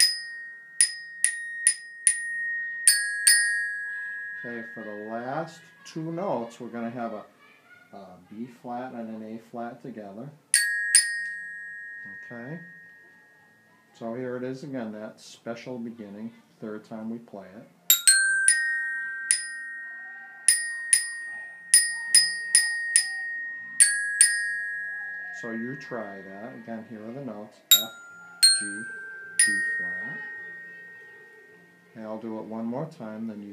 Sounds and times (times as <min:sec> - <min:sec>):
Marimba, xylophone: 0:00.0 - 0:05.7, 0:10.6 - 0:13.8, 0:17.9 - 0:32.2
Glockenspiel: 0:00.0 - 0:06.3, 0:10.6 - 0:14.1, 0:17.9 - 0:32.8.